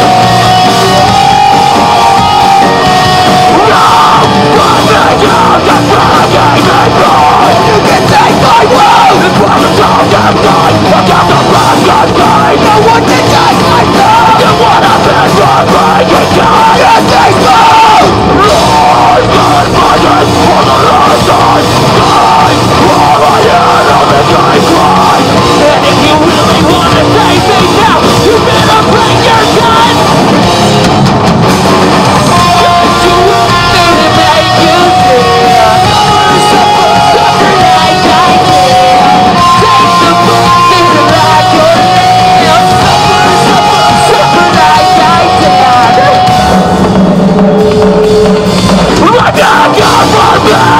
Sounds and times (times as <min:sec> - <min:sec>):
Music: 0:00.0 - 0:50.7.